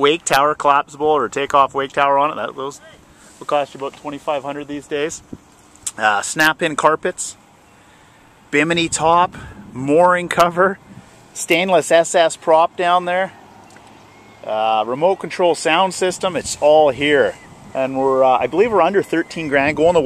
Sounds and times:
Speech: 0.0 - 5.2, 5.9 - 7.4, 8.6 - 10.8, 11.4 - 13.4, 14.4 - 20.0.

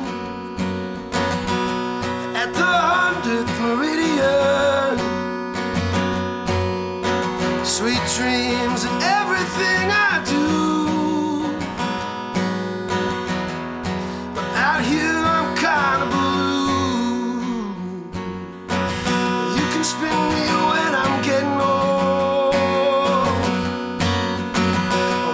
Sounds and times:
Music: 0.0 - 25.3.

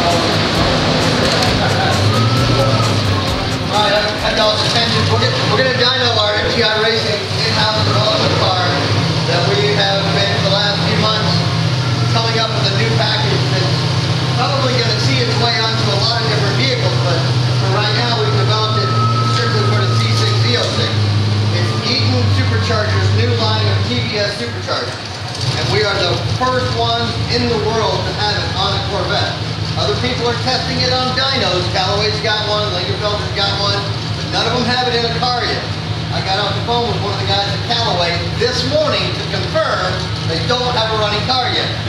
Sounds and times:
Speech: 1.4 - 13.8, 14.4 - 41.8.

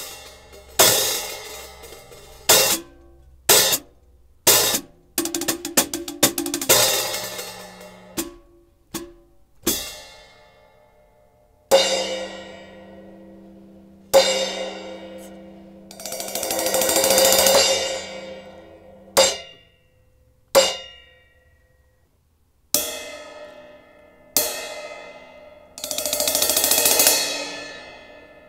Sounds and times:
Music: 0.0 - 28.4.

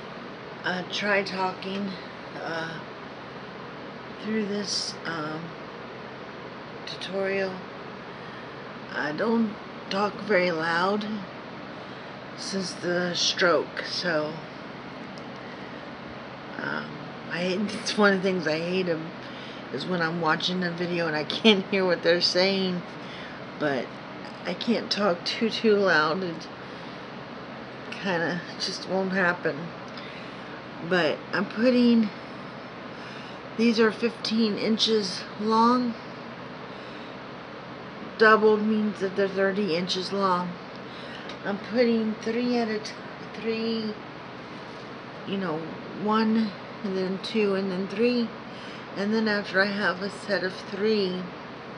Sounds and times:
Speech: 0.7 - 2.8, 4.2 - 5.6, 6.9 - 7.7, 8.9 - 11.3, 12.4 - 14.4, 16.6 - 22.9, 23.6 - 26.5, 28.0 - 29.7, 30.8 - 32.2, 33.6 - 36.0, 38.2 - 40.6, 41.2 - 44.0, 45.3 - 48.4, 49.0 - 51.3.

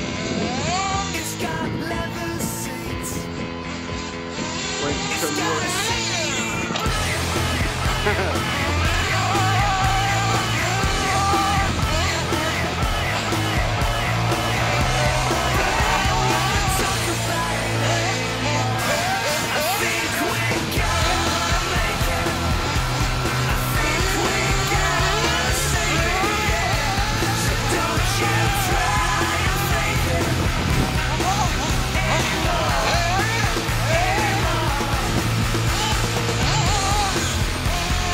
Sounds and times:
Music: 0.0 - 38.1
Speech: 4.8 - 12.6, 31.0 - 34.7.

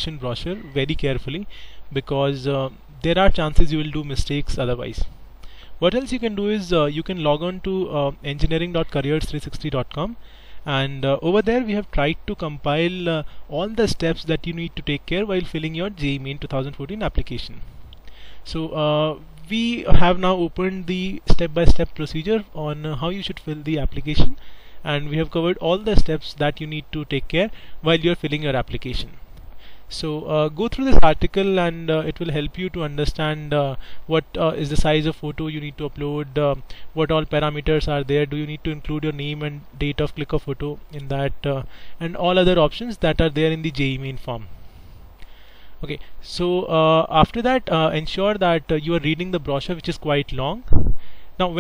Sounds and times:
Speech: 0.0 - 5.1, 5.8 - 17.7, 18.5 - 29.2, 29.9 - 44.5, 45.8 - 50.7, 51.4 - 51.6.

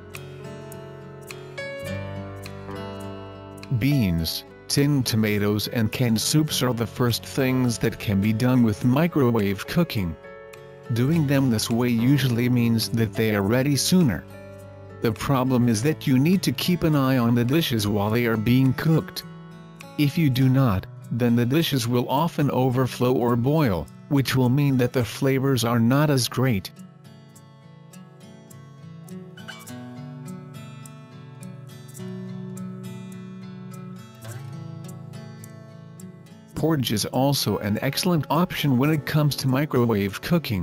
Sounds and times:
Music: 0.0 - 40.6
Speech: 3.7 - 10.2, 10.9 - 14.3, 15.0 - 19.2, 20.0 - 26.8, 36.6 - 40.6.

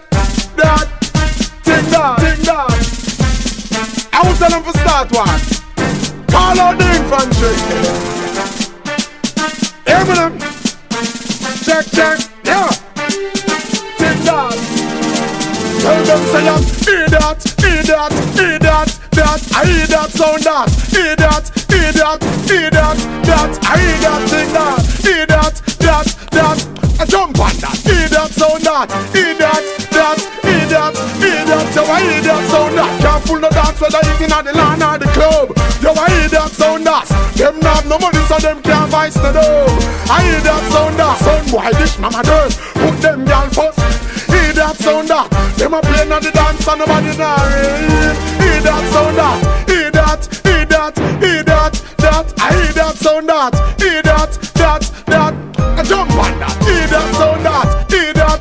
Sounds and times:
Music: 0.0 - 58.4.

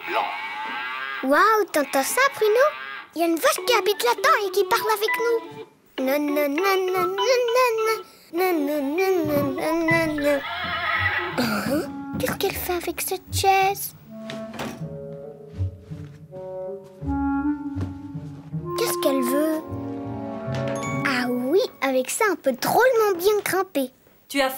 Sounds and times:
Child speech, kid speaking: 1.2 - 10.5, 11.8 - 14.0, 18.7 - 19.7, 21.0 - 24.5
Music: 3.6 - 8.1, 9.2 - 21.8.

